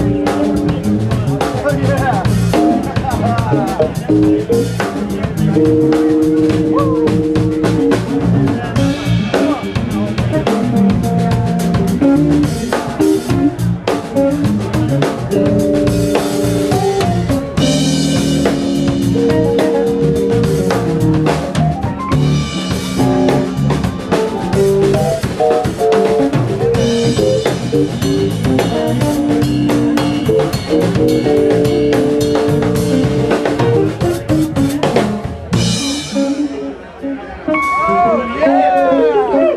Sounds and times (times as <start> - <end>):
Music: 0.0 - 39.5
Speech: 0.0 - 39.5.